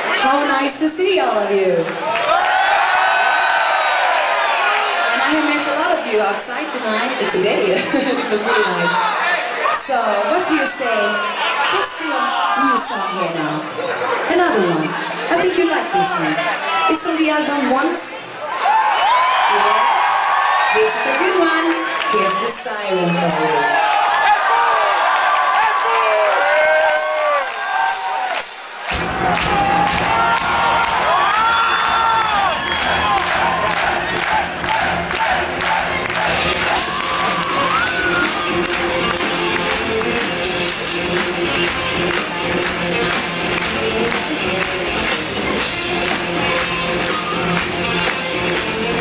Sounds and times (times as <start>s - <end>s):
Music: 28.9s - 49.0s.